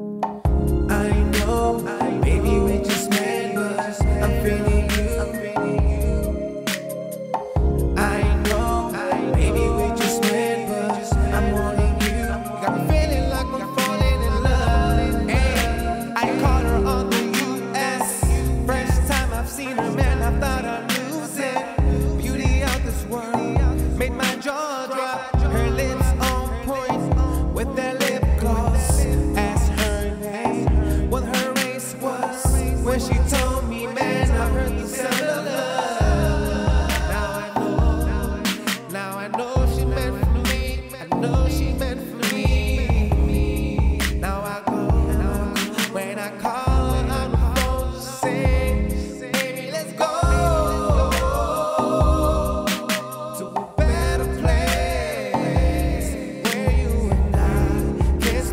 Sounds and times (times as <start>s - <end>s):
Music: 0.0s - 58.5s.